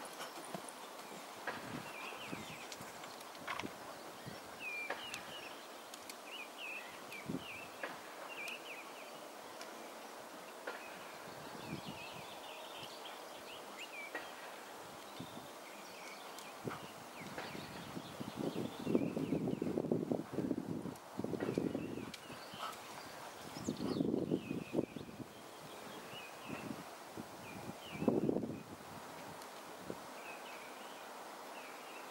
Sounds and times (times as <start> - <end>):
Horse: 0.0 - 3.8, 21.4 - 24.0
Outside, urban or manmade: 0.0 - 32.1.